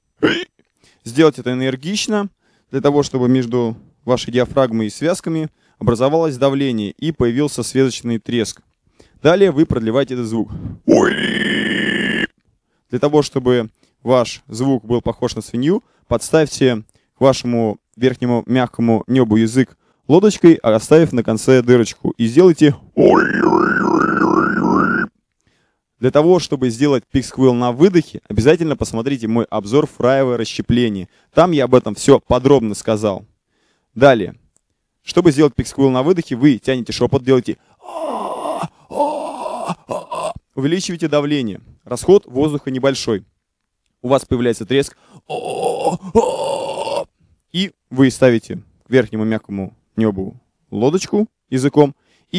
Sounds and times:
Speech: 0.3 - 11.3, 12.9 - 23.5, 26.0 - 33.3, 34.0 - 43.3, 44.0 - 52.3.

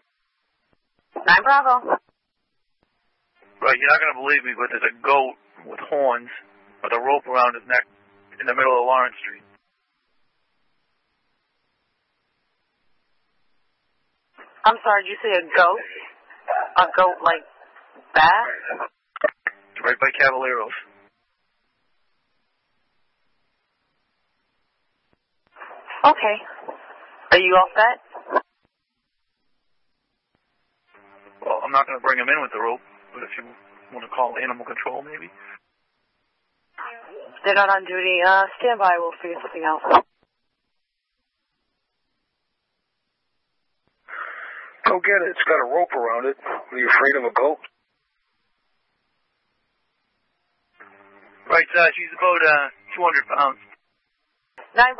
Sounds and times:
Speech: 3.6 - 9.4, 18.2 - 20.9, 31.4 - 35.6, 36.8 - 40.0, 44.8 - 47.7, 51.5 - 53.6, 54.7 - 55.0.

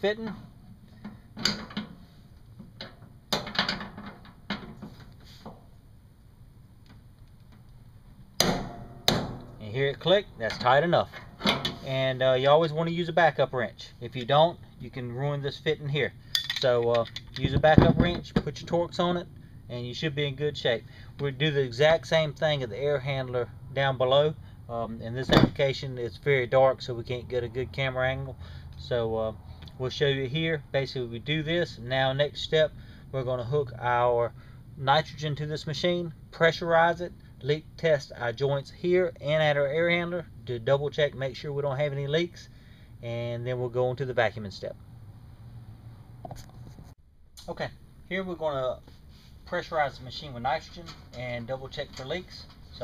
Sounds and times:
Speech: 0.0 - 0.4, 9.6 - 11.2, 11.8 - 44.8, 47.4 - 48.9, 49.5 - 52.8.

